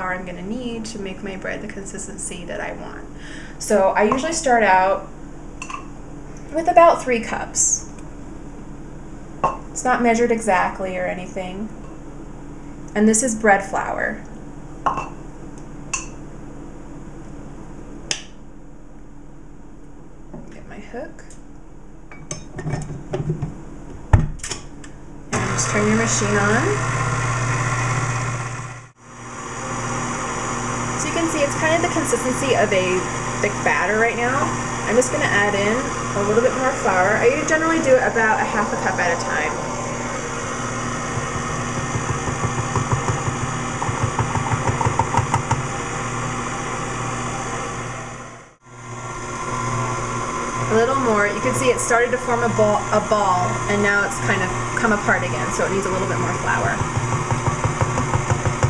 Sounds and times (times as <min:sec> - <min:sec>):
Dishes, pots, and pans: 0:22.1 - 0:23.5.